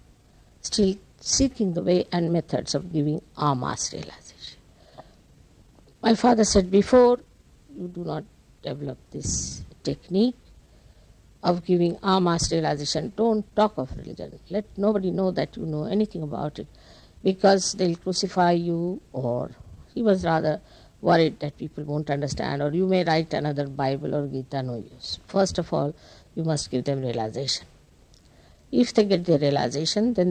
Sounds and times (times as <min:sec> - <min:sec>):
Speech: 0:00.6 - 0:04.6, 0:06.0 - 0:10.4, 0:11.4 - 0:16.7, 0:17.3 - 0:27.7, 0:28.8 - 0:30.3.